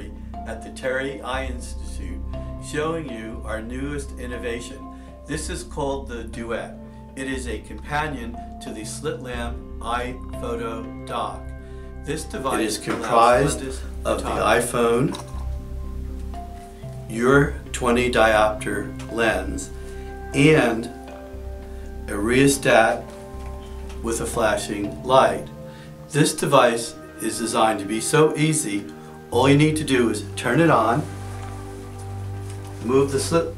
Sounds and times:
Speech: 0.0 - 11.5, 12.1 - 15.2, 17.1 - 19.7, 20.3 - 21.0, 22.1 - 23.1, 24.0 - 25.5, 26.1 - 31.1, 32.8 - 33.5
Music: 0.0 - 33.5.

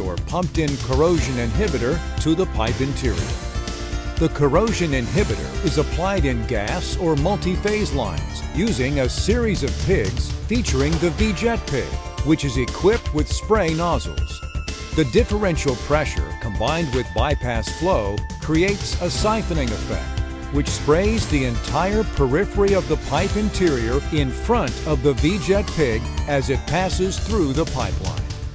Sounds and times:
Speech: 0.0 - 3.3, 4.2 - 14.4, 15.0 - 28.3
Music: 0.0 - 28.5.

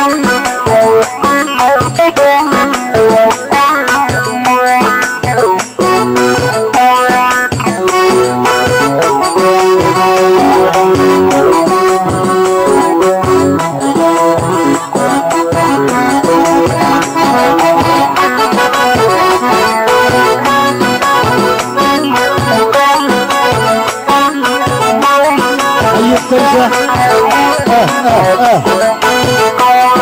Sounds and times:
Wedding music: 0.4 - 4.6, 7.6 - 30.0.

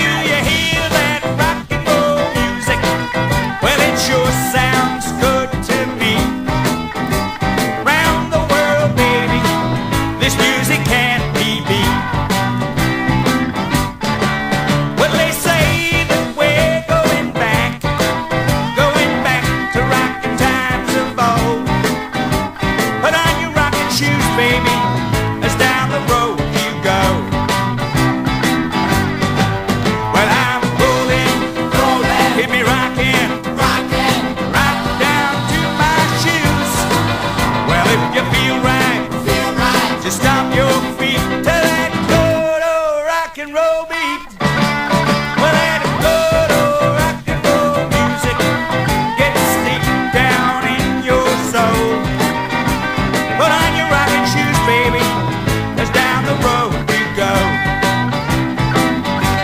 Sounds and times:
Rock and roll: 0.0 - 59.4.

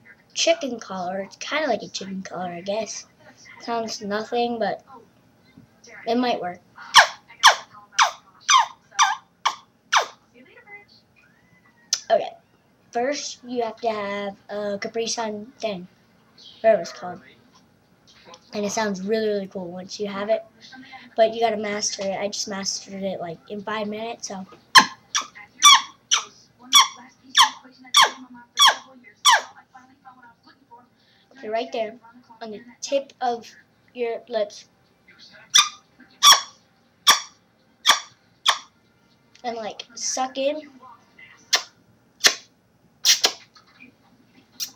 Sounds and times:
Speech: 0.0 - 9.2, 12.0 - 36.2, 39.4 - 41.6.

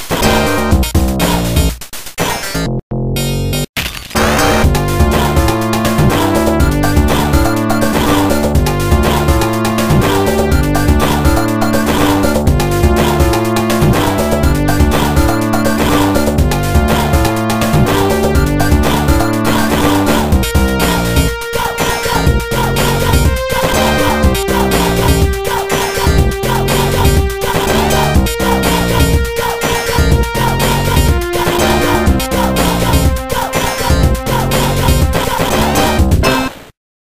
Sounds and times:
Music: 0.0 - 36.6.

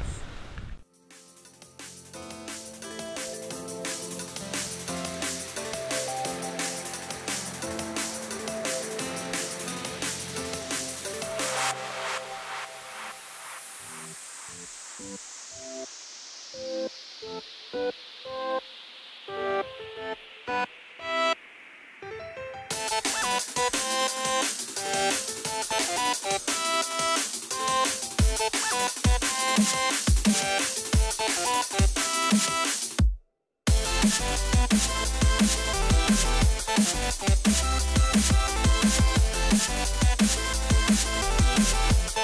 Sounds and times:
Music: 0.8 - 42.2.

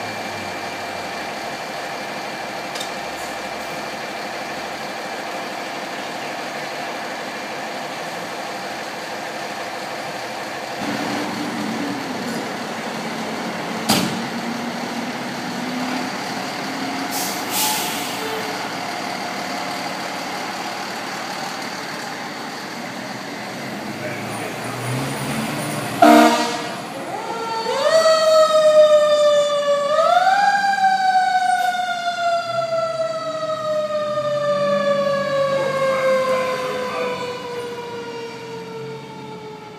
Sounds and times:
Fire engine, fire truck (siren): 0.0 - 39.7.

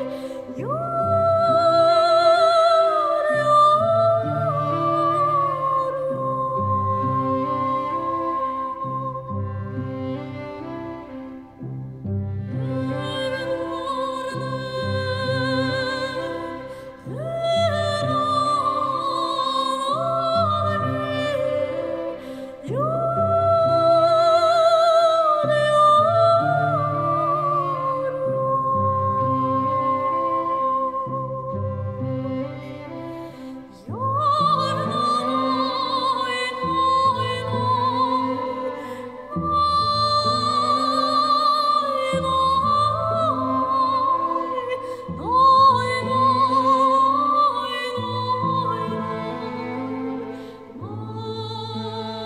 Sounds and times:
Sad music: 0.0 - 52.2.

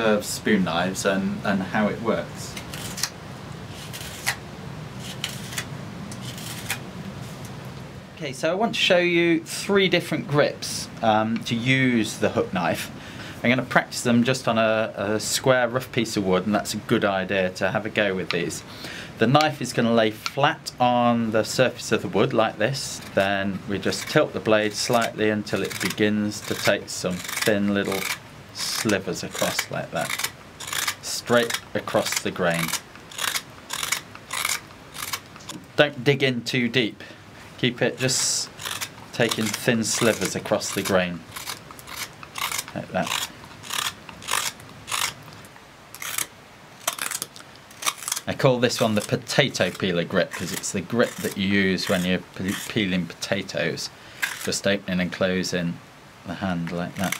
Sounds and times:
Speech: 0.0 - 2.6, 8.2 - 30.2, 31.0 - 32.8, 35.8 - 38.5, 39.1 - 41.2, 42.7 - 43.2, 48.3 - 57.1.

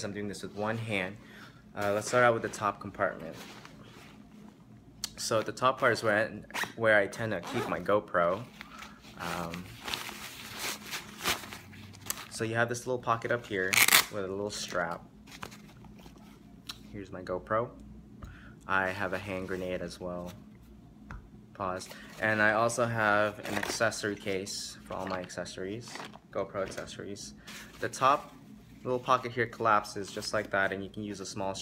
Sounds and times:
Speech: 0.0 - 1.2, 1.8 - 3.4, 5.1 - 8.5, 9.2 - 9.7, 12.3 - 15.0, 16.9 - 17.8, 18.7 - 20.4, 21.6 - 31.6.

